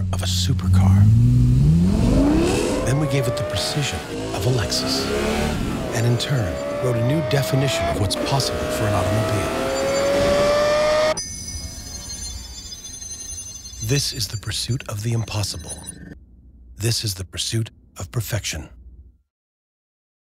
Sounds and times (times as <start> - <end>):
Speech: 0.0 - 1.2, 2.8 - 5.1, 5.9 - 9.5, 13.8 - 16.2, 16.8 - 18.8.